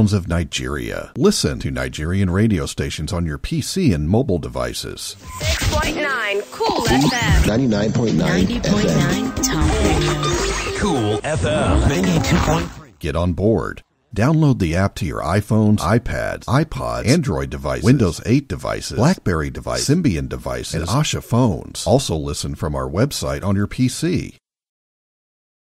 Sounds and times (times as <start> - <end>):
Speech: 0.0 - 24.4.